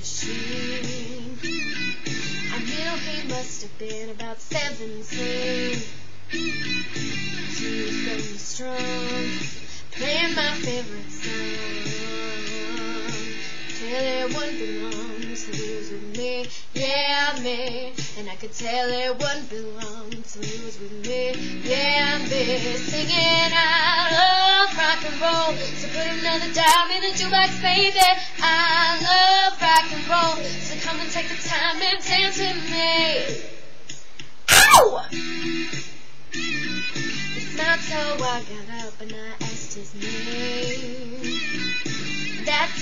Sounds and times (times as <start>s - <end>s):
Female singing: 0.0s - 1.4s, 2.5s - 5.9s, 7.6s - 9.4s, 10.0s - 33.4s, 37.5s - 41.5s, 42.4s - 42.8s
Rock and roll: 0.2s - 3.5s, 4.6s - 15.9s, 34.5s - 38.4s, 39.4s - 42.8s.